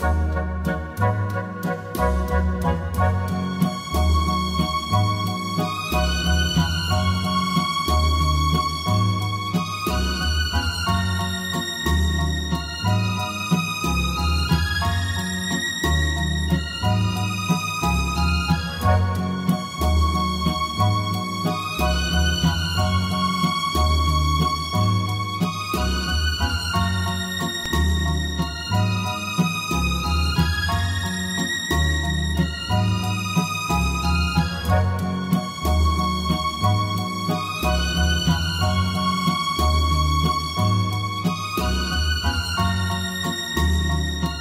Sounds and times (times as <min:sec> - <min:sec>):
New-age music: 0:00.0 - 0:44.4.